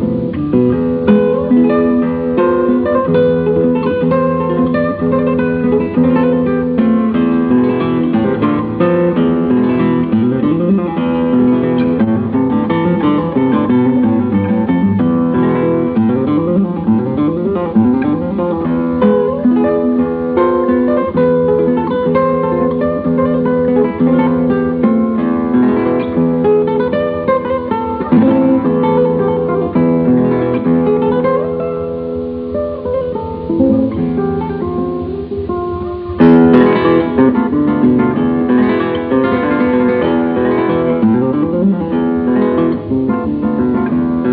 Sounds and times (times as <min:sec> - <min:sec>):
Strum: 0:00.0 - 0:44.3.